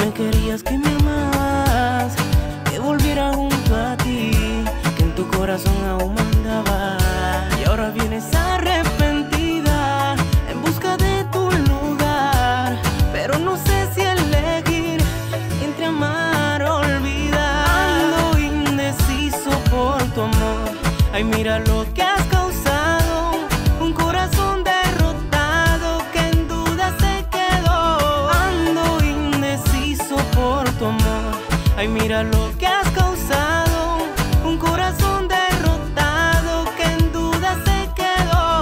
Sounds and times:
Funk: 0.0 - 38.6.

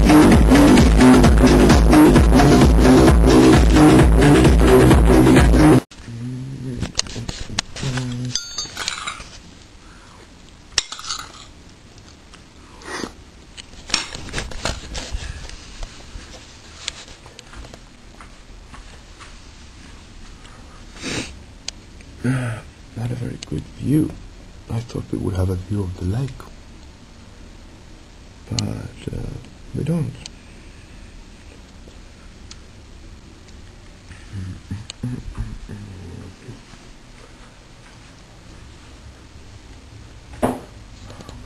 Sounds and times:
Speech: 6.1 - 8.4, 23.0 - 26.5, 28.5 - 30.3, 34.3 - 36.7.

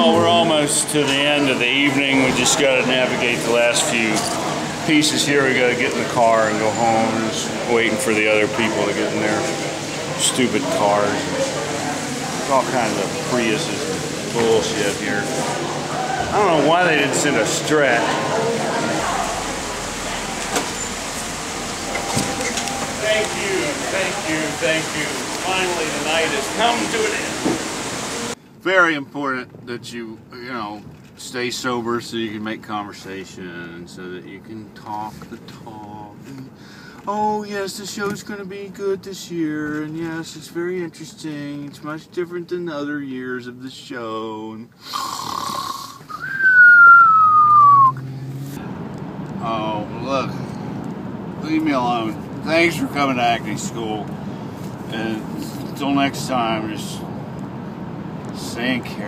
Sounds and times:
Speech: 0.0 - 15.6, 16.2 - 19.4, 23.0 - 27.4, 28.6 - 44.7, 49.4 - 50.4, 51.4 - 54.1, 54.9 - 57.1, 58.3 - 59.0
Outside, urban or manmade: 0.0 - 59.0.

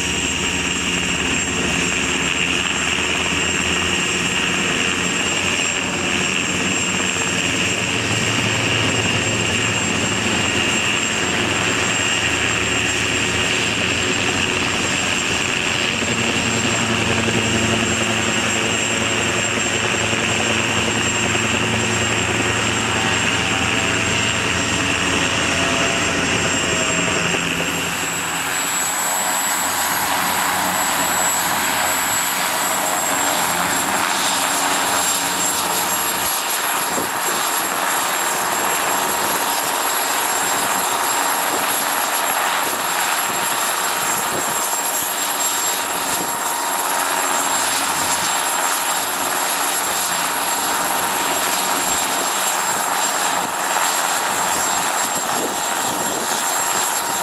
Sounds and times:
Helicopter: 0.0 - 57.2.

